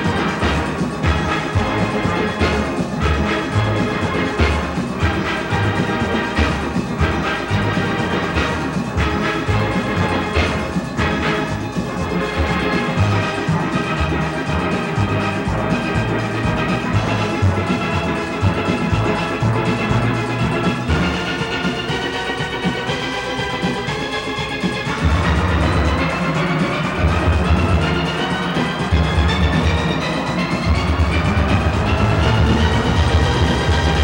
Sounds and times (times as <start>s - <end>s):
Music: 0.0s - 34.0s.